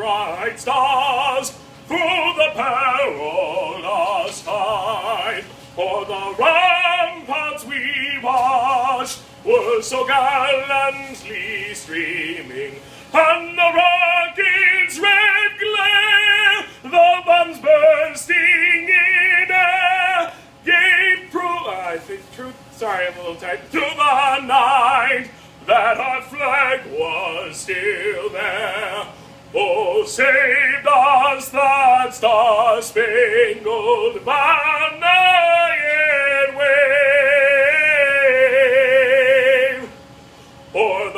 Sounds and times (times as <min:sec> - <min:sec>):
Male singing: 0:00.0 - 0:40.0, 0:40.7 - 0:41.1.